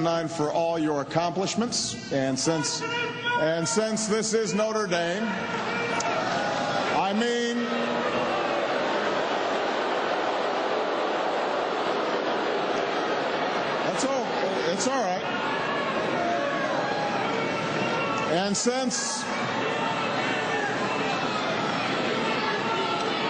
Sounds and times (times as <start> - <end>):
Narration, monologue: 0.0 - 5.4
Male speech, man speaking: 0.0 - 5.5, 6.9 - 7.8, 13.9 - 15.2, 18.3 - 19.3.